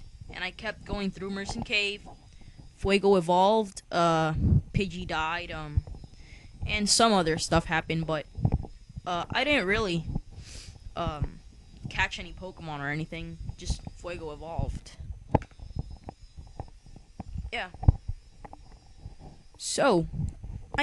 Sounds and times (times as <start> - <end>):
Speech: 0.3 - 2.0, 2.8 - 5.8, 6.7 - 8.2, 9.1 - 10.1, 11.0 - 15.0, 19.6 - 20.2
Heart sounds, heartbeat: 4.3 - 12.5.